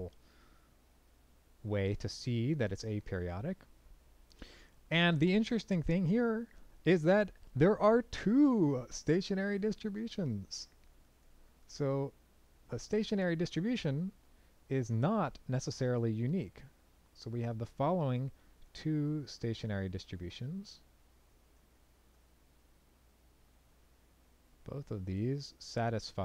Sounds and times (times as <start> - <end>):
Narration, monologue: 0.0 - 26.2.